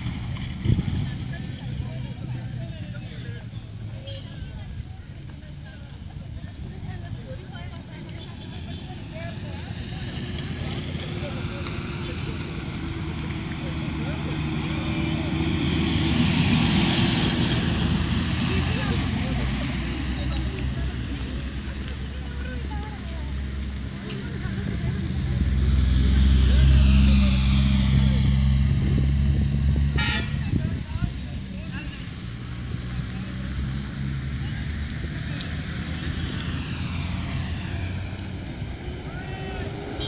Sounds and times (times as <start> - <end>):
Vehicle: 0.0 - 40.0
Speech: 0.7 - 15.7, 18.3 - 28.5, 30.3 - 35.8.